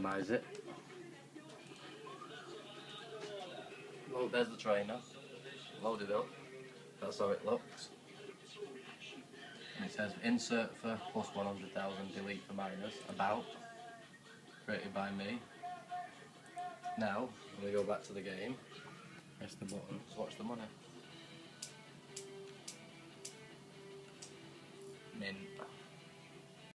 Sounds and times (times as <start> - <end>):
Speech: 0.0 - 0.5, 3.2 - 5.1, 9.8 - 13.5, 14.7 - 15.4, 17.0 - 18.6, 19.4 - 20.8, 25.2 - 25.5
Music: 0.0 - 26.7.